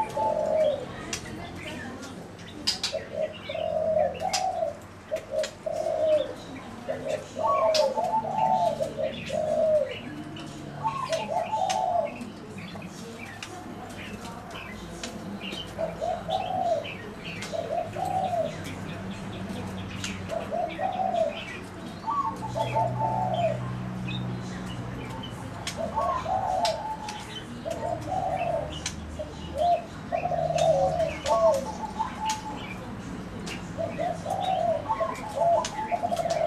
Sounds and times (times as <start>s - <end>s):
Outside, urban or manmade: 0.0s - 36.4s
Pigeon, dove: 0.0s - 36.4s
Speech: 0.0s - 36.4s.